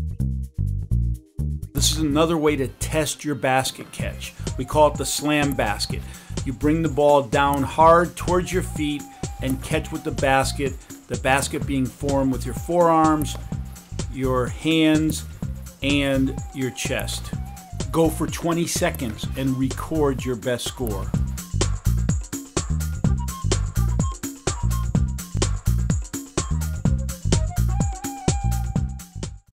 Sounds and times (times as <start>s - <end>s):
Music: 0.0s - 29.5s
Speech: 1.8s - 13.4s, 14.1s - 21.1s.